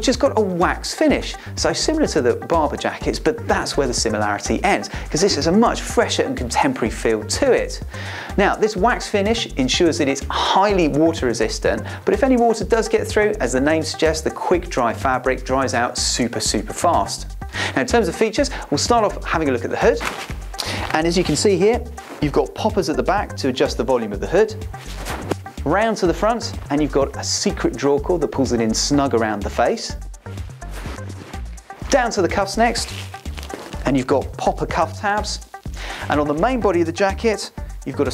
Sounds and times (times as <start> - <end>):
Speech: 0.0 - 7.8, 8.4 - 20.1, 20.9 - 24.6, 25.6 - 30.0, 31.9 - 33.0, 33.8 - 35.4, 36.1 - 38.1
Music: 0.0 - 38.1.